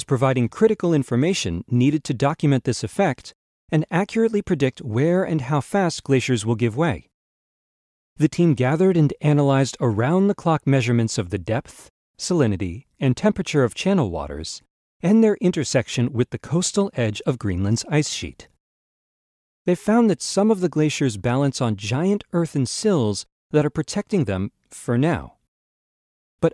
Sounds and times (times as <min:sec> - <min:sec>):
Speech: 0:00.0 - 0:07.1, 0:08.2 - 0:18.6, 0:19.7 - 0:25.4.